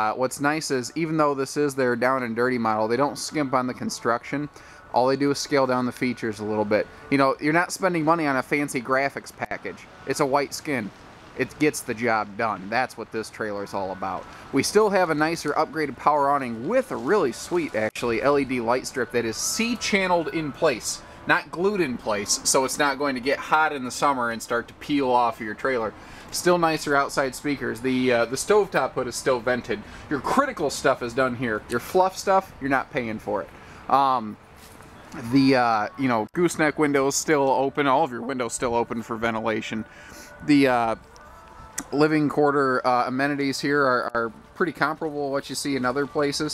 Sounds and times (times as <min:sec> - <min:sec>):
Speech: 0:00.0 - 0:34.4, 0:35.2 - 0:41.0, 0:41.8 - 0:46.5.